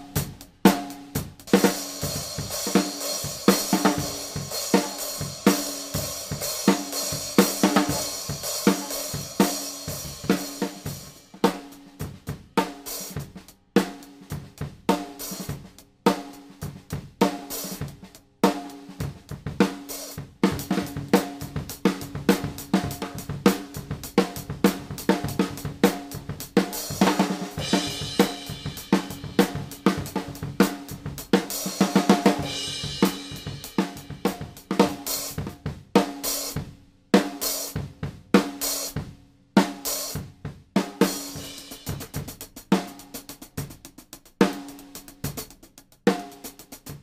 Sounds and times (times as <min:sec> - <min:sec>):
Bass drum: 0:00.0 - 0:13.7, 0:14.4 - 0:36.8, 0:37.8 - 0:47.0
Drum kit: 0:00.0 - 0:47.0
Drum roll: 0:00.0 - 0:47.0.